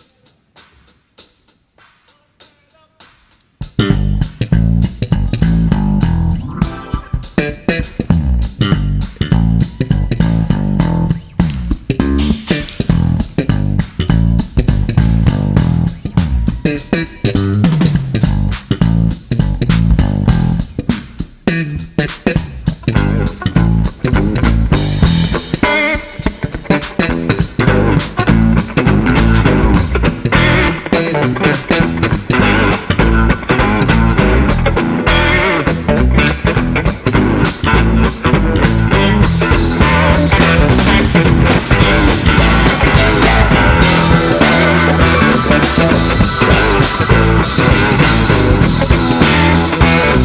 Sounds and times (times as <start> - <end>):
Ska: 0.0 - 50.2
Psychedelic rock: 3.6 - 50.2.